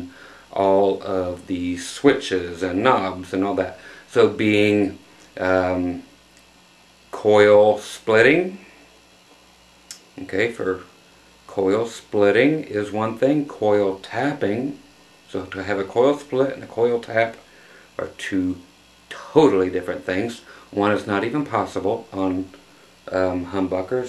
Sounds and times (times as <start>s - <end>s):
Speech: 0.0s - 6.1s, 7.1s - 8.7s, 9.9s - 10.9s, 11.5s - 17.4s, 18.0s - 24.0s.